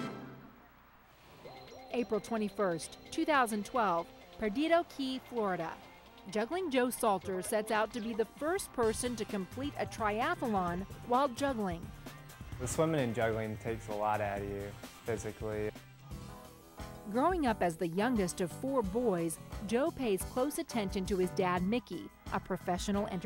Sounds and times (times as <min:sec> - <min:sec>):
Music: 0:00.0 - 0:23.2
Speech: 0:02.0 - 0:11.8, 0:12.6 - 0:15.7, 0:17.1 - 0:23.2.